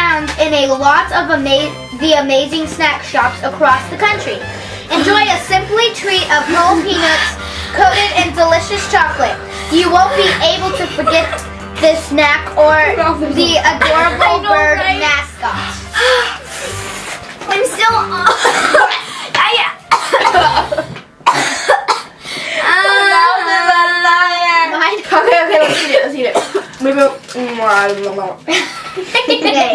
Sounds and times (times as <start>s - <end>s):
Speech: 0.0s - 15.5s, 22.7s - 28.5s.